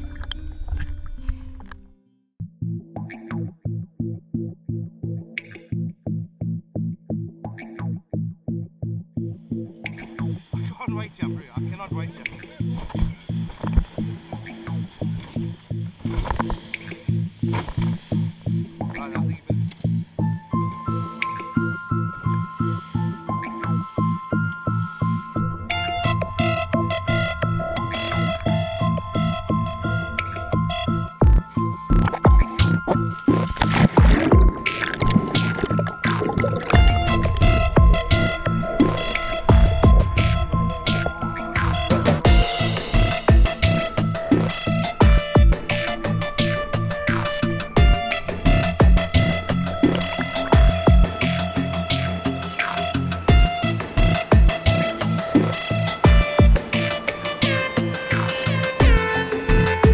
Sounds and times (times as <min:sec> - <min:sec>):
Music: 0:00.0 - 0:59.9.